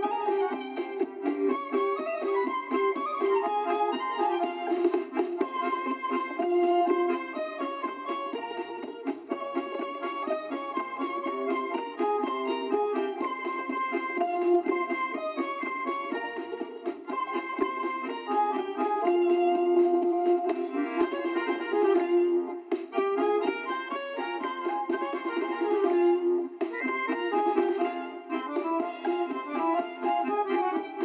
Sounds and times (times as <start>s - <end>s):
Music: 0.0s - 31.0s.